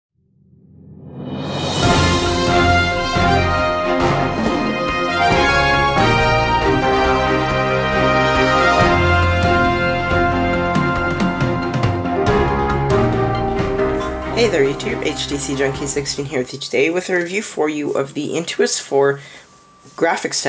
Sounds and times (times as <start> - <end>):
Theme music: 1.0 - 16.9.